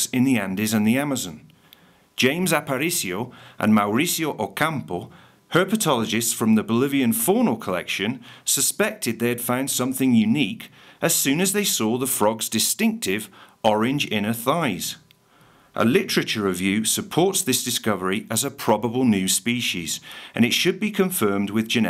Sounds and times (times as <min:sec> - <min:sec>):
Speech: 0:00.0 - 0:01.5, 0:02.2 - 0:15.1, 0:15.8 - 0:21.8.